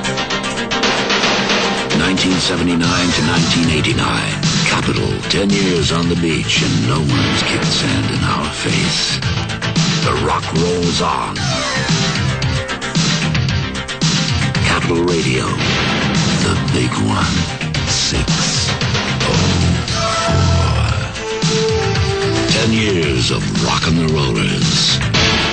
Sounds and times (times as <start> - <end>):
Music: 0.0 - 25.5
Speech: 2.0 - 9.2, 10.0 - 11.4, 14.6 - 15.7, 16.4 - 21.1, 22.5 - 25.0.